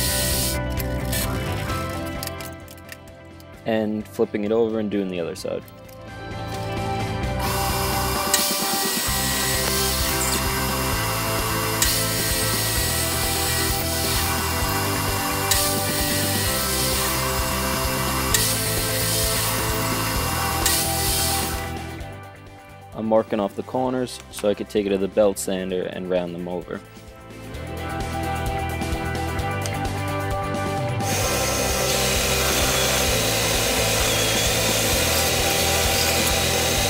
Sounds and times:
Music: 0:00.0 - 0:36.8.

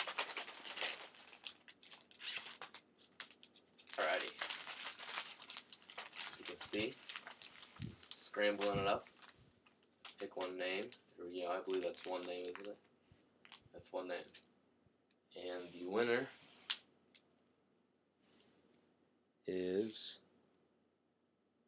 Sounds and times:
Speech: 0:04.0 - 0:04.4, 0:06.3 - 0:07.0, 0:08.2 - 0:09.0, 0:10.2 - 0:12.8, 0:13.8 - 0:14.3, 0:15.3 - 0:16.4, 0:19.5 - 0:20.2.

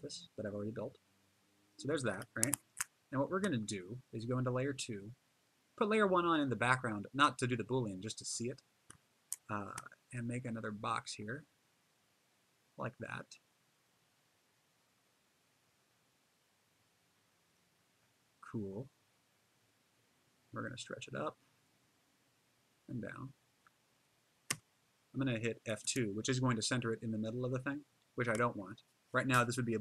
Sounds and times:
Narration, monologue: 0:00.0 - 0:11.6, 0:12.8 - 0:13.6, 0:20.5 - 0:21.6, 0:22.9 - 0:29.8.

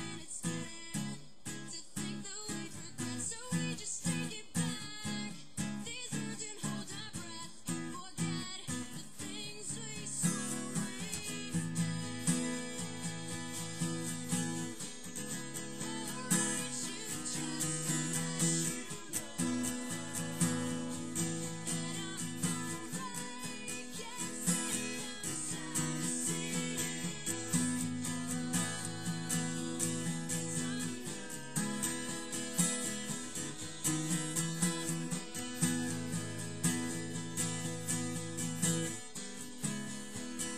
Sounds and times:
Acoustic guitar: 0:00.0 - 0:40.5
Strum: 0:07.7 - 0:40.5.

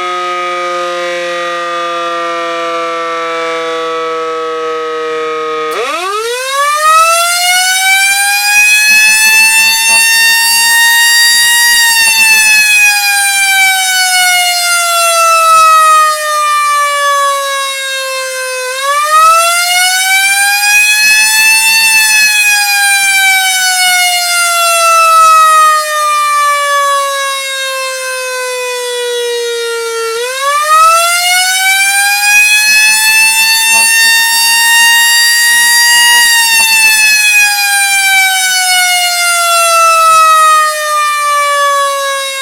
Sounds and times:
Siren: 0:00.0 - 0:42.4.

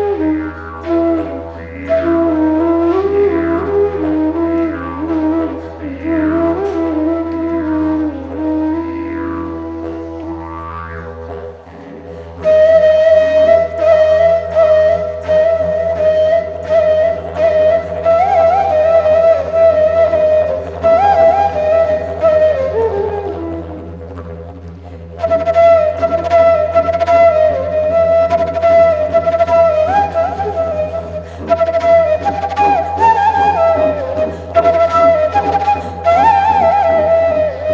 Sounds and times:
Didgeridoo: 0:00.0 - 0:37.7
Flute: 0:00.0 - 0:37.7.

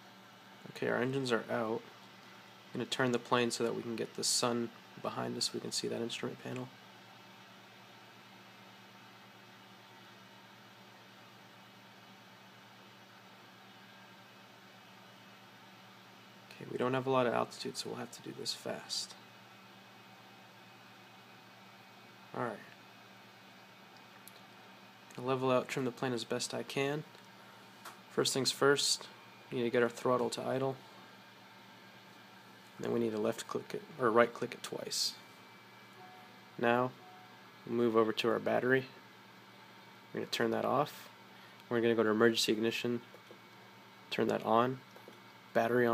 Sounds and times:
Speech: 0:00.6 - 0:01.9, 0:02.7 - 0:06.8, 0:16.5 - 0:19.2, 0:22.3 - 0:22.8, 0:25.1 - 0:27.1, 0:28.1 - 0:30.8, 0:32.8 - 0:35.2, 0:36.6 - 0:37.0, 0:37.6 - 0:39.0, 0:40.1 - 0:43.1, 0:44.1 - 0:44.9, 0:45.5 - 0:45.9.

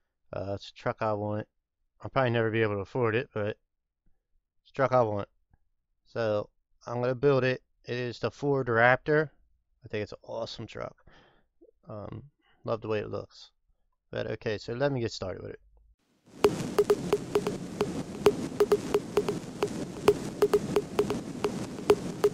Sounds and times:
Speech: 0:00.4 - 0:03.6, 0:04.7 - 0:05.3, 0:06.1 - 0:09.3, 0:09.9 - 0:11.0, 0:11.9 - 0:13.6, 0:14.2 - 0:15.6
Music: 0:16.4 - 0:22.3.

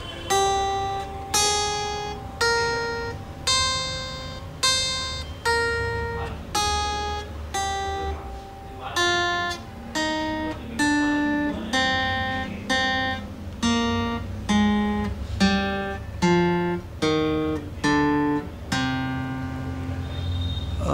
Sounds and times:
Guitar: 0:00.0 - 0:20.9
Speech: 0:08.0 - 0:09.4, 0:10.4 - 0:12.9.

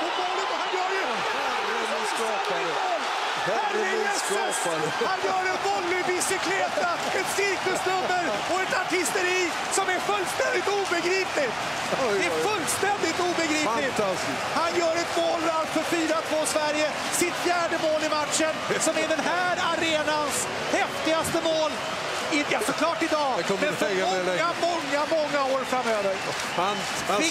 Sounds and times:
Speech: 0:00.0 - 0:27.3.

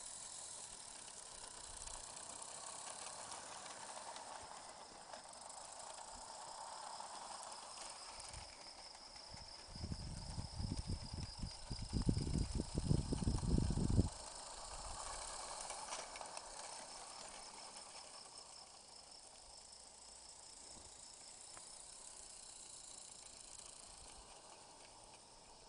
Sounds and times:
Hiss: 0:00.0 - 0:25.6.

